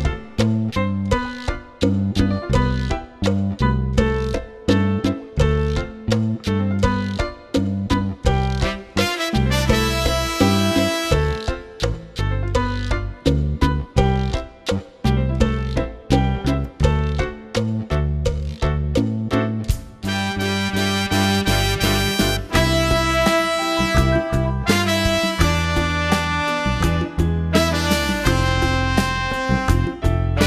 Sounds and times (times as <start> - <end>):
Music: 0.0 - 30.4.